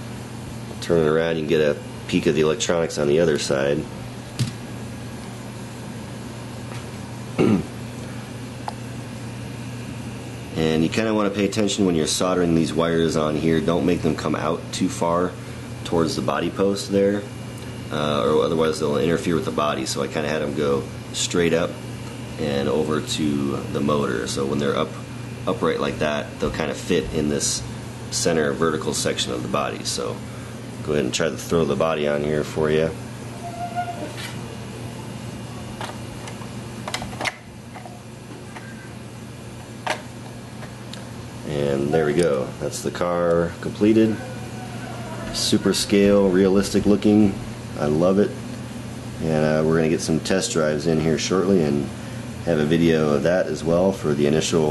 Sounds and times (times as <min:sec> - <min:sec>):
Speech: 0:00.8 - 0:03.9, 0:10.5 - 0:17.3, 0:17.9 - 0:21.8, 0:22.4 - 0:30.2, 0:30.8 - 0:33.0, 0:41.4 - 0:44.3, 0:45.2 - 0:48.4, 0:49.2 - 0:54.7.